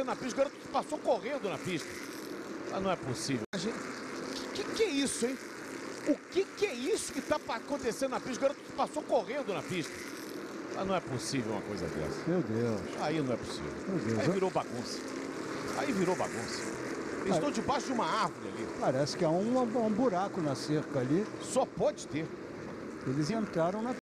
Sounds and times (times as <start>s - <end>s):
Speech: 0.0s - 1.8s, 2.7s - 3.8s, 4.4s - 5.4s, 6.3s - 9.9s, 10.8s - 15.0s, 15.7s - 16.6s, 17.2s - 22.3s, 23.1s - 24.0s
Car: 0.0s - 24.0s.